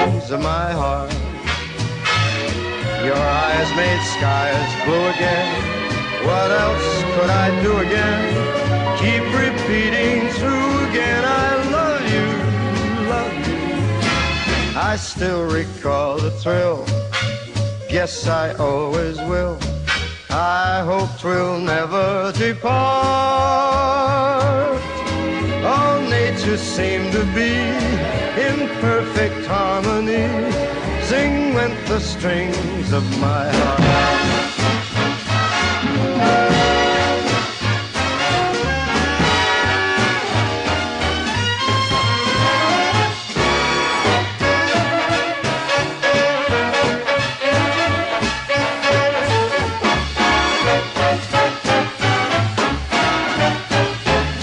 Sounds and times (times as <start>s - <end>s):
Swing music: 0.0s - 54.4s.